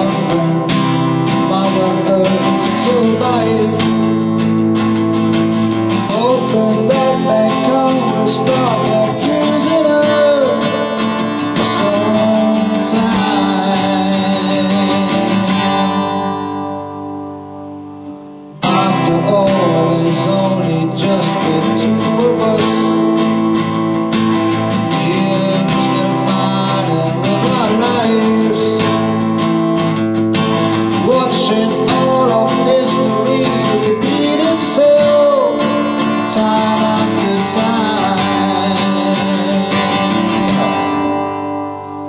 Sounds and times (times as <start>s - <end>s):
Strum: 0.0s - 42.0s.